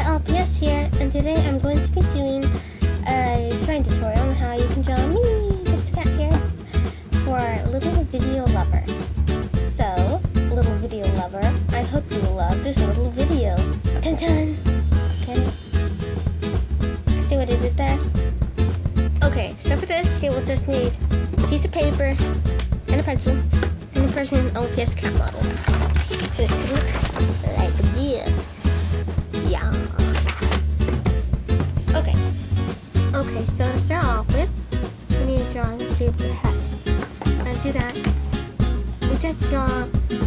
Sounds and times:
Speech: 0:00.0 - 0:06.5, 0:07.2 - 0:08.9, 0:09.6 - 0:14.6, 0:15.2 - 0:15.6, 0:17.2 - 0:18.0, 0:19.2 - 0:22.3, 0:22.9 - 0:28.6, 0:29.4 - 0:30.3, 0:31.9 - 0:32.2, 0:33.1 - 0:34.5, 0:35.1 - 0:36.6, 0:37.4 - 0:38.1, 0:39.0 - 0:39.9
Music: 0:00.0 - 0:40.2.

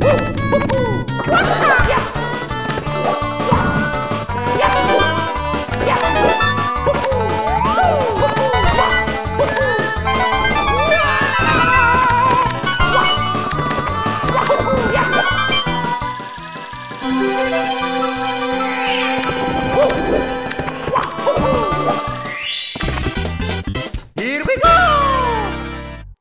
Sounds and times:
Music: 0:00.0 - 0:26.2
Speech: 0:01.3 - 0:02.2, 0:24.2 - 0:25.6.

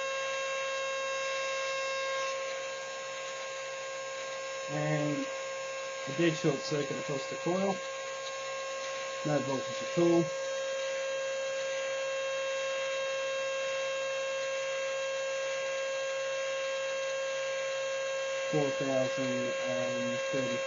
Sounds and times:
Hum: 0:00.0 - 0:20.6
Mains hum: 0:00.0 - 0:20.6.

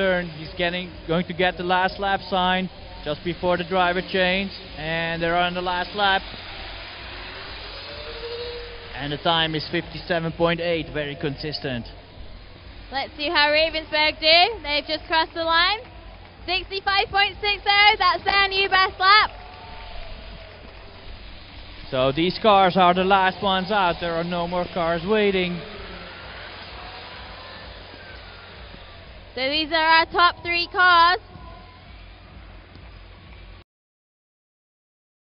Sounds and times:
Speech: 0:29.4 - 0:31.2.

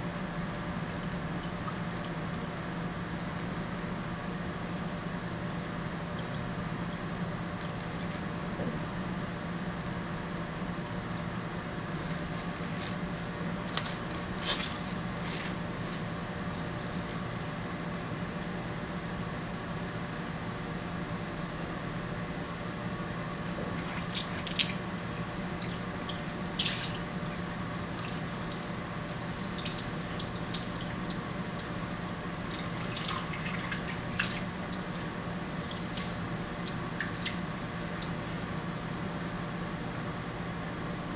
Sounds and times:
Water: 0:00.3 - 0:04.6, 0:23.6 - 0:39.3
Liquid: 0:00.4 - 0:03.6, 0:23.6 - 0:24.9, 0:25.5 - 0:39.3
Water tap, faucet: 0:25.6 - 0:39.1.

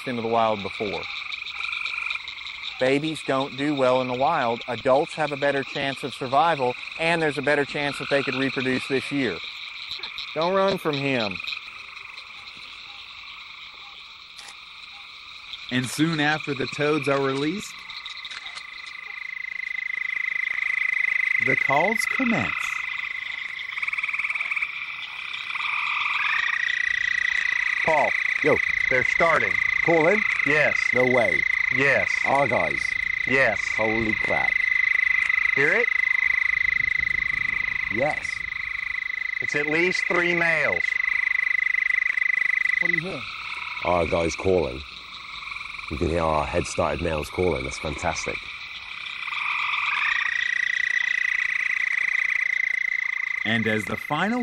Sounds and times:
Frog: 0:00.0 - 0:54.4.

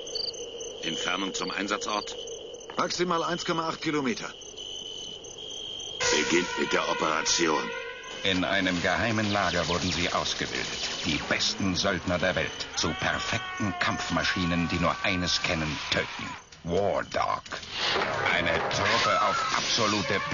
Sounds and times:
Speech: 0:00.8 - 0:02.2, 0:02.8 - 0:04.4, 0:06.1 - 0:17.6, 0:18.2 - 0:20.3.

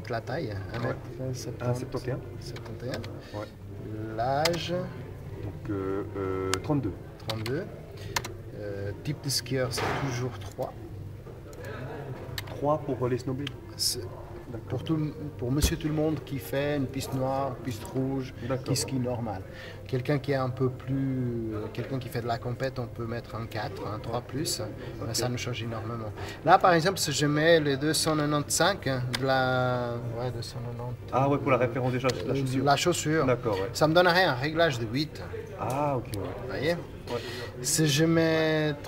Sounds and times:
Speech: 0:11.5 - 0:38.8.

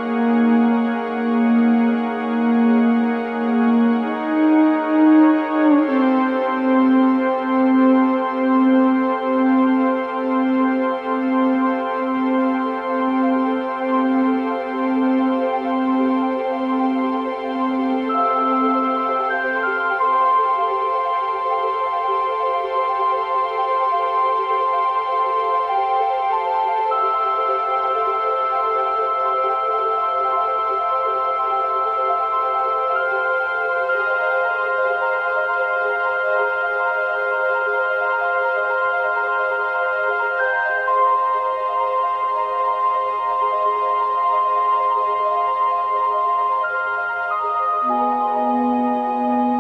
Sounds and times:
Music: 0:00.0 - 0:49.6.

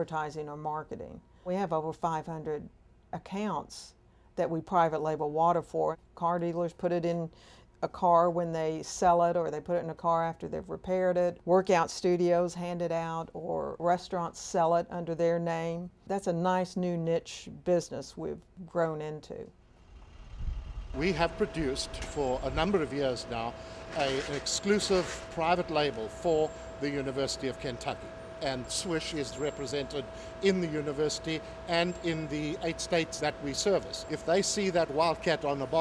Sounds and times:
Speech: 0:00.0 - 0:19.5, 0:21.0 - 0:35.8.

